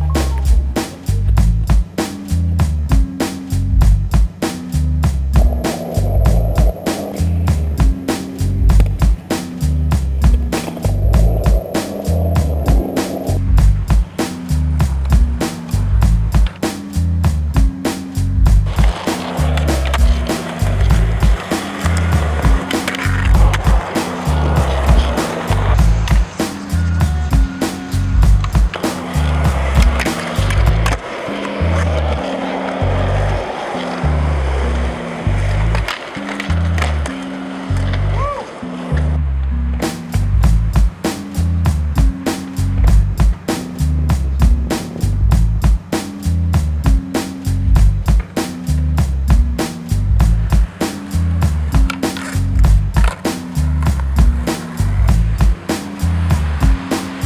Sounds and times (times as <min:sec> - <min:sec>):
Music: 0:00.0 - 0:57.2
Skateboard: 0:05.4 - 0:46.1, 0:46.8 - 0:57.2.